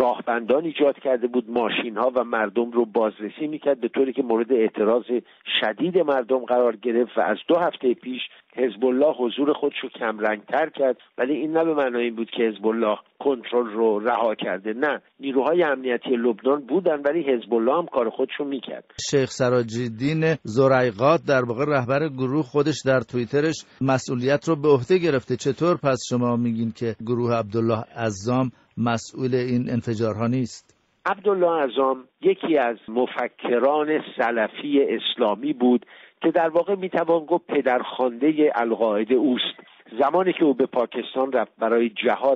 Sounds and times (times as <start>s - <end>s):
Speech: 0.0s - 42.3s.